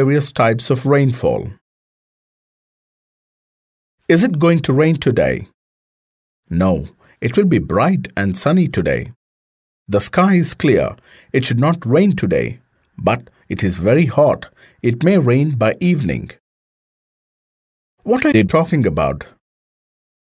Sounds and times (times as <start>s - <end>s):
Speech: 0.0s - 1.6s, 4.1s - 5.6s, 6.5s - 9.2s, 9.9s - 16.4s, 18.0s - 19.4s.